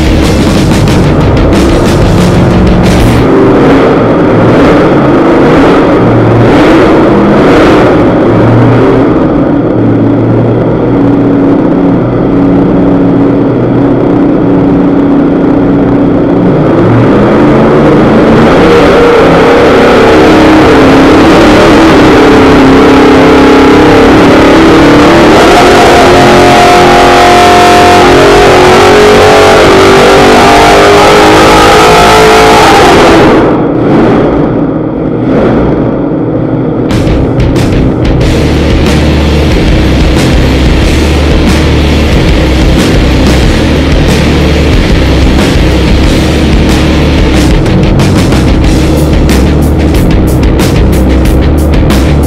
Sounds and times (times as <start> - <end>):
Engine: 0.0 - 52.2.